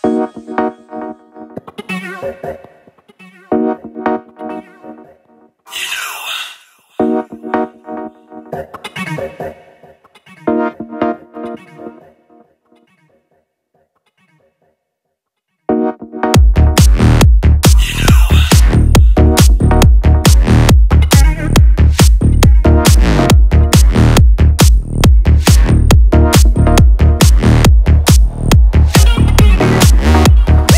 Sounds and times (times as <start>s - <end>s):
Synthesizer: 0.0s - 5.5s, 6.9s - 12.6s, 15.7s - 30.7s.